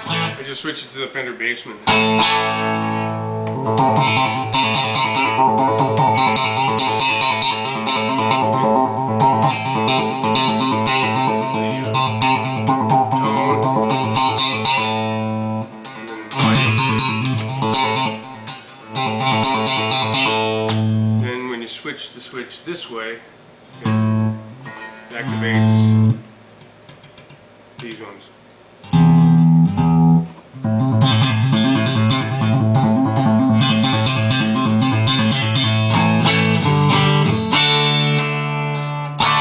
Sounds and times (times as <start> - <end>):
Tapping (guitar technique): 0.0 - 0.4, 1.9 - 21.2, 23.7 - 28.1, 28.8 - 39.4.